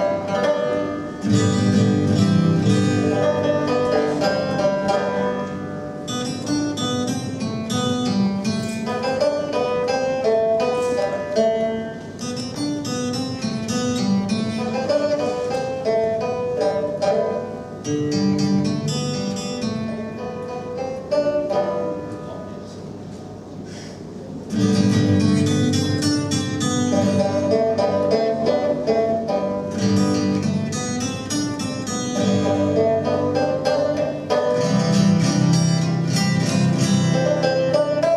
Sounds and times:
Music: 0.0s - 22.4s, 24.5s - 38.1s.

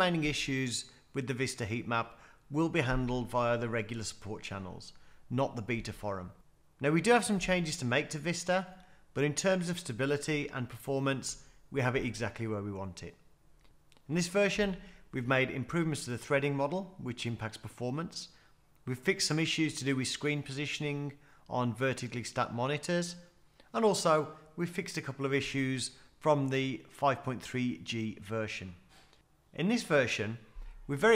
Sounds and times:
Speech: 0.0s - 13.2s, 14.1s - 28.9s, 29.6s - 31.1s.

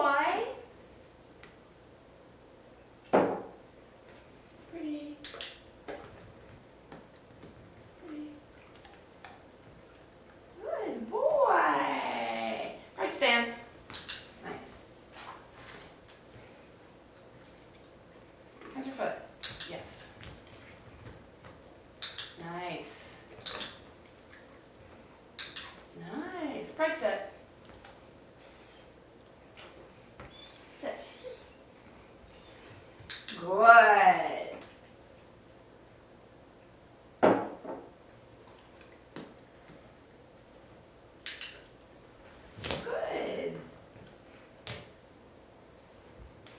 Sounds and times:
Speech: 0.0s - 0.7s, 10.6s - 13.6s, 26.0s - 27.4s, 33.4s - 34.6s, 42.8s - 43.7s.

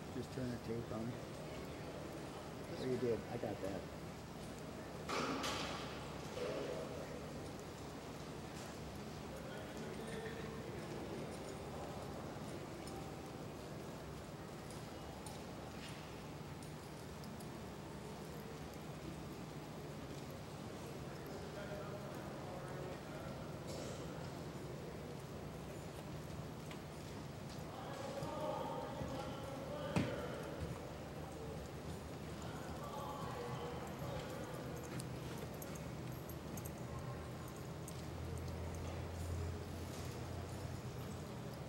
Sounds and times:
Clip-clop: 0.0s - 41.6s.

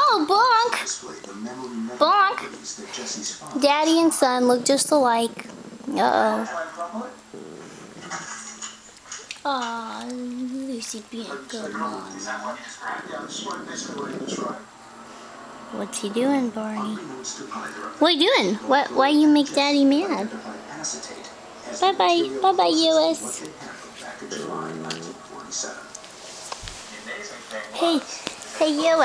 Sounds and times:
Speech: 0.0s - 7.2s, 9.5s - 14.6s, 15.8s - 25.9s, 26.9s - 29.0s
Animal: 4.8s - 10.2s, 23.5s - 26.0s.

